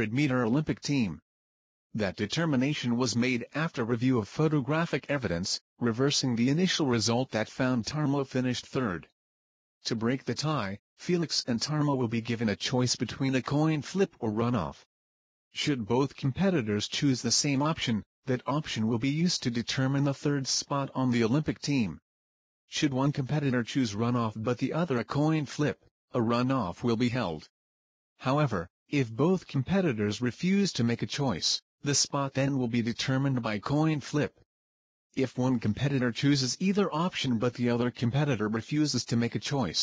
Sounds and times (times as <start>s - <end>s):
Speech: 0.0s - 1.2s, 2.0s - 9.2s, 9.8s - 14.9s, 15.6s - 22.0s, 22.7s - 27.5s, 28.2s - 34.4s, 35.2s - 39.8s.